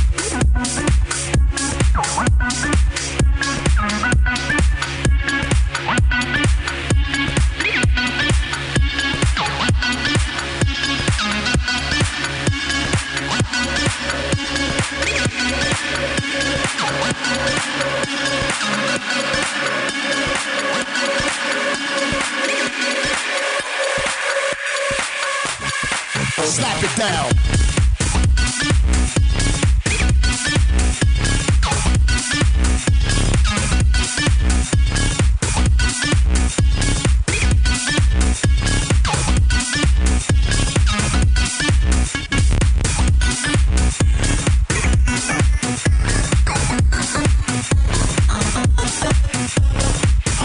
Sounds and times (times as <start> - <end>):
Electronic dance music: 0.0 - 50.4.